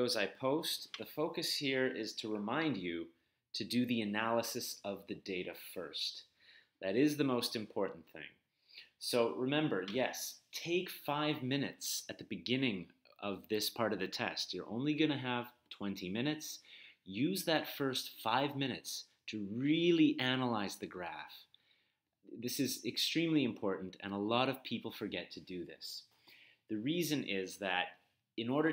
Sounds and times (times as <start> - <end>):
Speech: 0.0 - 21.5, 22.3 - 26.1, 26.7 - 28.7.